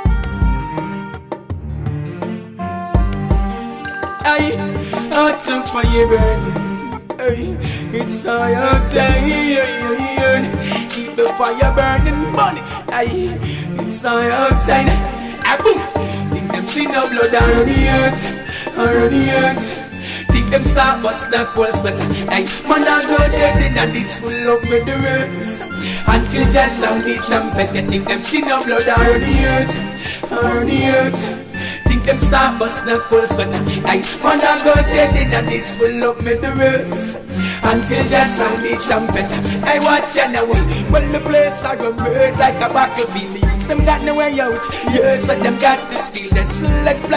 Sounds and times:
Music: 0:00.0 - 0:47.1.

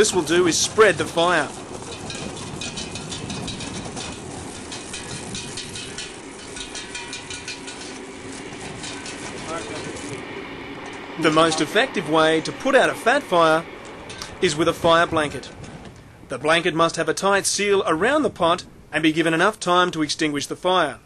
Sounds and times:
Fire: 0:00.0 - 0:21.0
Wind: 0:00.0 - 0:21.0.

